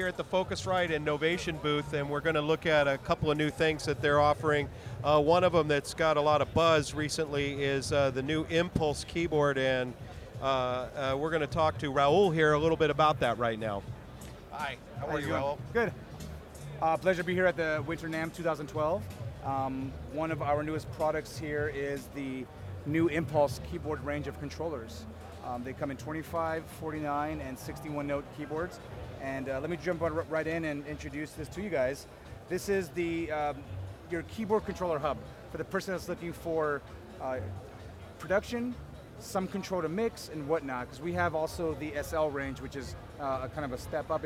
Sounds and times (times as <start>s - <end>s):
Speech: 0.0s - 16.0s, 16.6s - 37.6s, 38.2s - 44.2s
Music: 0.0s - 44.2s.